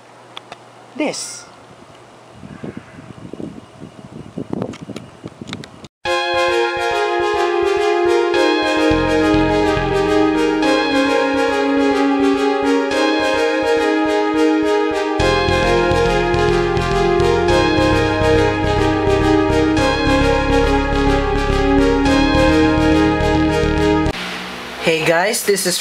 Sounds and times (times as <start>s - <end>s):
Music: 6.1s - 24.2s.